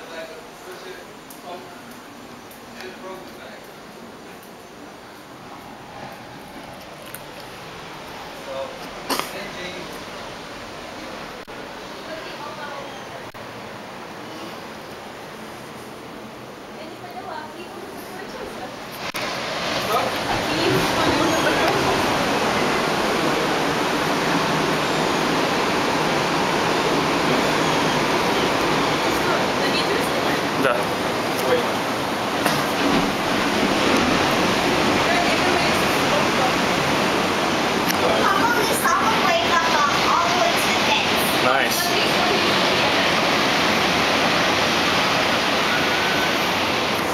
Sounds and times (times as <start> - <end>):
Waves, surf: 2.6 - 47.1.